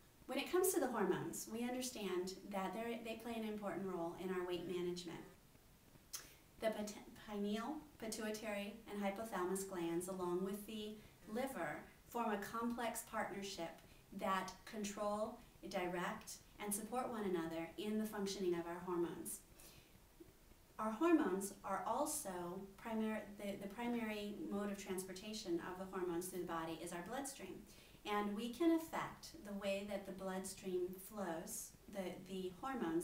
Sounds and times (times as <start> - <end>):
Speech: 0.3 - 5.4, 6.6 - 19.4, 20.8 - 33.0.